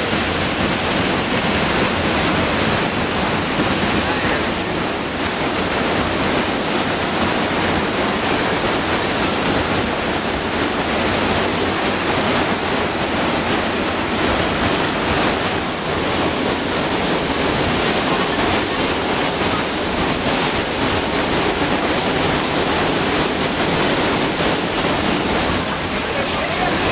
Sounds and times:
Waterfall: 0.0 - 26.9.

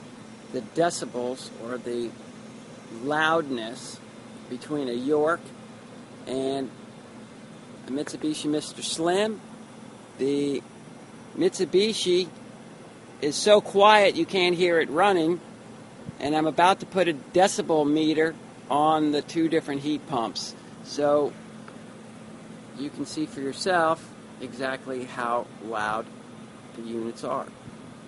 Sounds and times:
Speech: 0.5 - 2.2, 2.9 - 5.5, 6.3 - 6.8, 7.9 - 9.4, 10.2 - 10.6, 11.4 - 12.3, 13.2 - 15.4, 16.2 - 21.4, 22.8 - 26.1, 26.8 - 27.6.

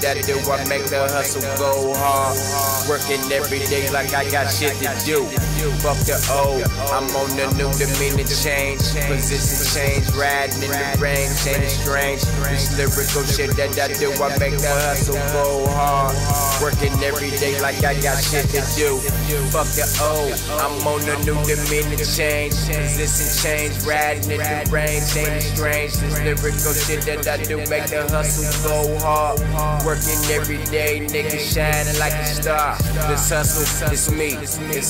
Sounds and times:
Music: 0.0 - 34.9.

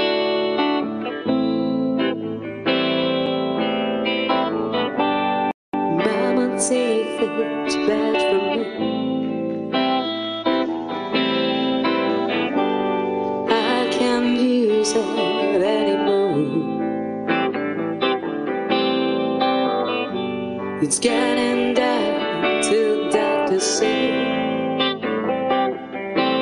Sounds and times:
Music: 0.0 - 26.4.

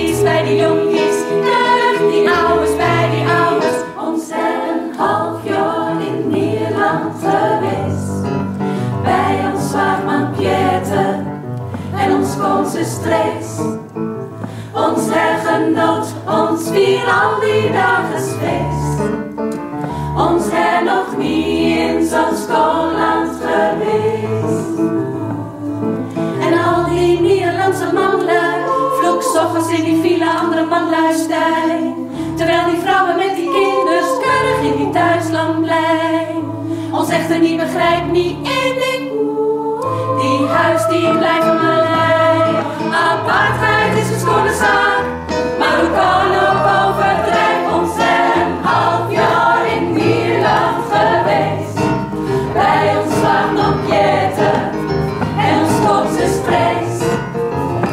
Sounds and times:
Choir: 0.0 - 13.8, 14.4 - 19.2, 19.9 - 57.9
Vocal music: 0.0 - 57.9.

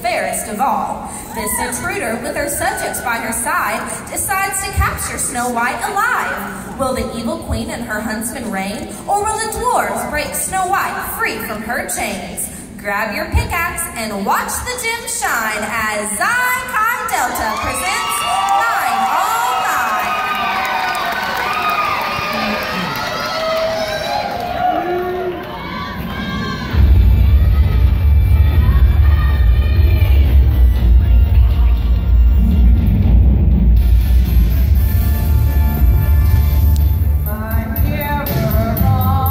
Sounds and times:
Music: 26.0 - 39.3.

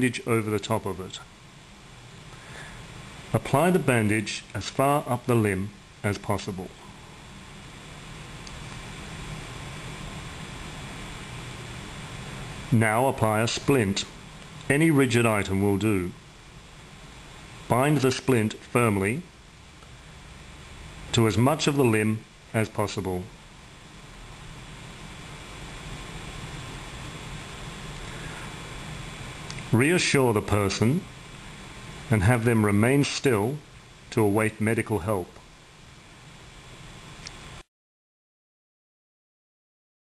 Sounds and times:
Speech: 0.0 - 1.3, 3.3 - 6.8, 12.7 - 16.2, 17.7 - 19.3, 21.1 - 23.4, 29.6 - 31.1, 32.1 - 35.4.

